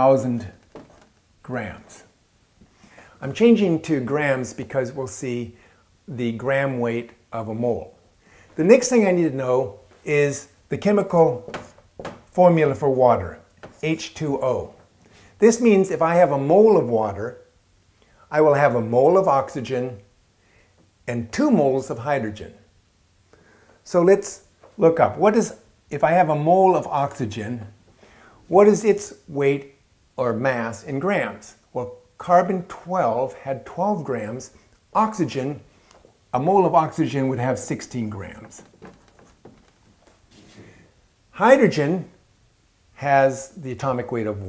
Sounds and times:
Speech: 0.0s - 0.6s, 1.4s - 2.1s, 3.2s - 8.0s, 8.6s - 11.5s, 12.3s - 14.8s, 15.4s - 17.5s, 18.3s - 20.1s, 21.1s - 22.7s, 23.8s - 27.8s, 28.5s - 35.7s, 36.4s - 38.7s, 41.4s - 42.2s, 43.0s - 44.4s
Inside, small room: 0.0s - 44.4s.

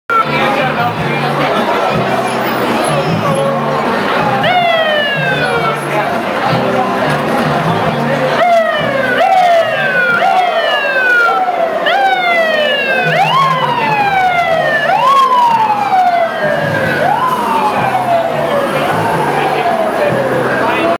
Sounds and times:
Speech: 0.1s - 20.9s
Vehicle: 0.1s - 20.9s.

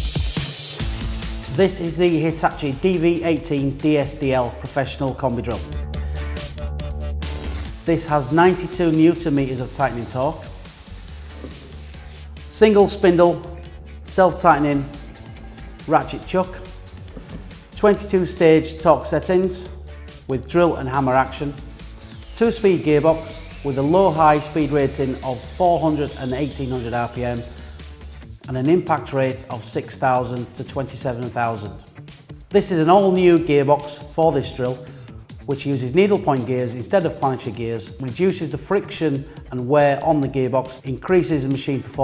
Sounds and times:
Music: 0.0s - 42.0s
Speech: 1.5s - 5.7s, 7.9s - 10.4s, 12.5s - 14.9s, 15.9s - 16.6s, 17.8s - 19.7s, 20.3s - 21.6s, 22.4s - 27.5s, 28.5s - 31.9s, 32.6s - 34.8s, 35.5s - 42.0s.

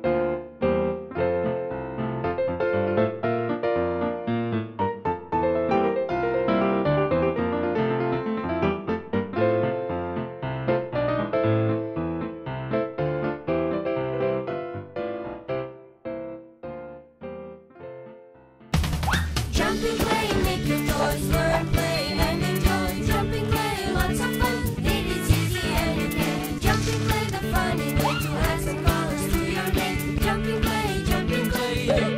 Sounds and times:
Music: 0.0s - 32.1s.

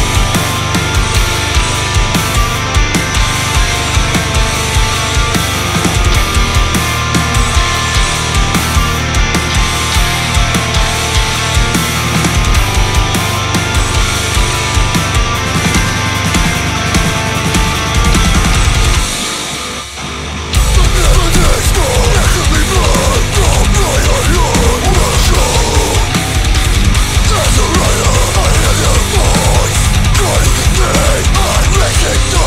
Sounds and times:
Music: 0.0s - 32.4s.

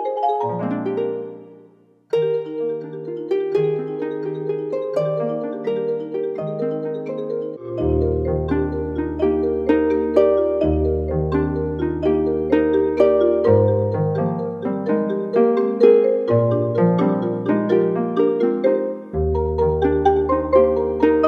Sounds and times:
Marimba, xylophone: 0.0s - 21.2s.

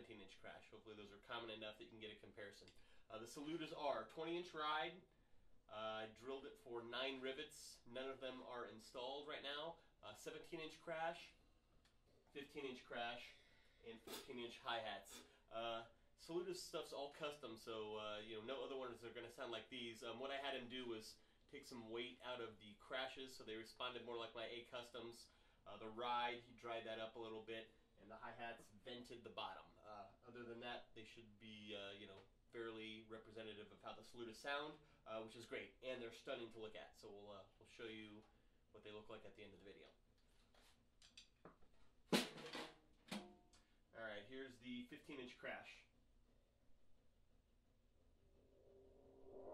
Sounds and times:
Speech: 0.0s - 5.1s, 5.7s - 11.4s, 12.3s - 40.0s, 43.9s - 46.0s.

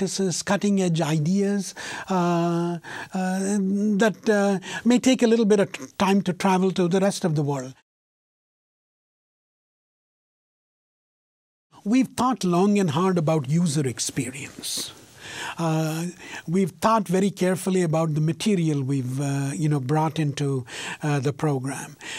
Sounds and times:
Speech: 0.0s - 7.8s, 11.8s - 15.0s, 15.6s - 22.0s.

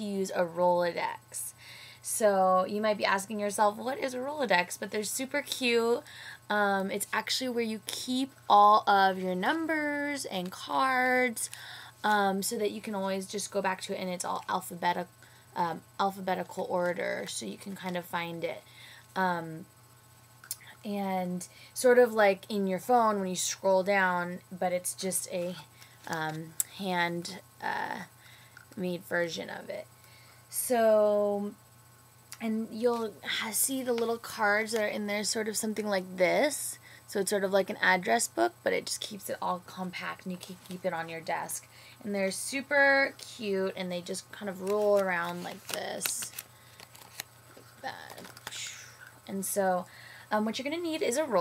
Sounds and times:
Speech: 2.1s - 18.6s, 20.8s - 28.1s, 28.8s - 29.9s, 30.5s - 31.6s, 32.4s - 46.3s, 49.3s - 51.4s.

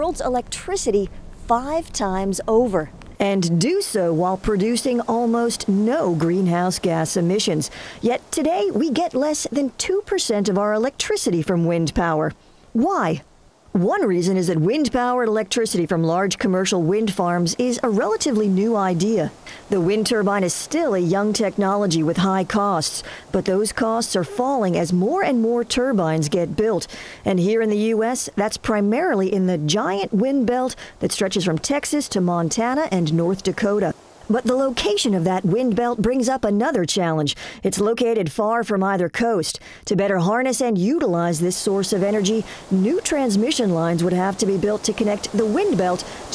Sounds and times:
Speech: 0.0s - 13.2s, 13.8s - 46.3s.

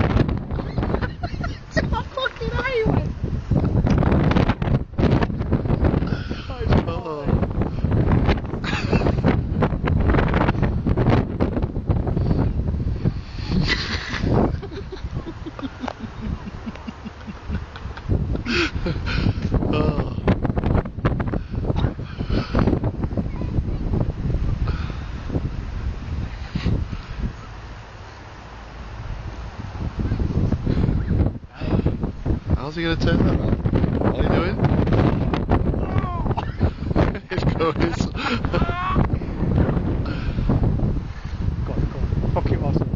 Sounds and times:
Wind noise (microphone): 0.0s - 27.8s, 28.8s - 42.9s.

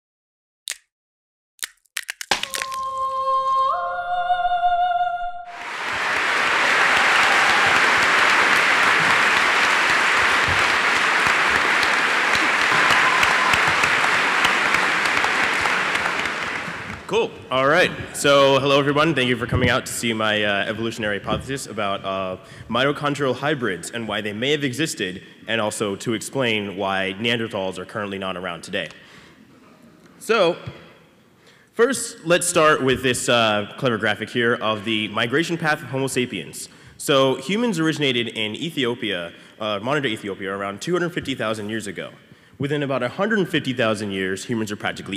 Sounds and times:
Inside, large room or hall: 2.2s - 45.1s.

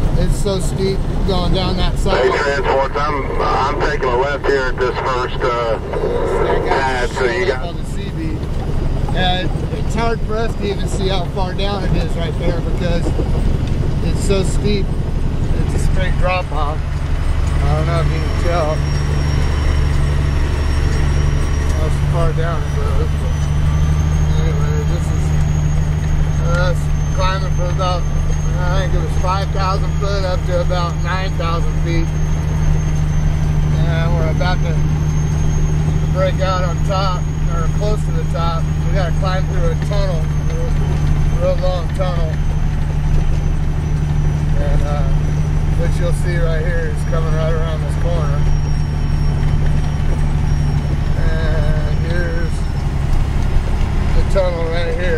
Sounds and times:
Vehicle: 0.0s - 55.1s
Speech: 0.1s - 8.4s, 9.2s - 13.2s, 14.0s - 14.9s, 15.6s - 16.8s, 17.6s - 18.9s, 21.7s - 23.4s, 24.3s - 25.2s, 26.4s - 32.2s, 33.7s - 34.9s, 36.2s - 42.4s, 44.6s - 48.6s, 51.2s - 52.7s, 54.2s - 55.1s.

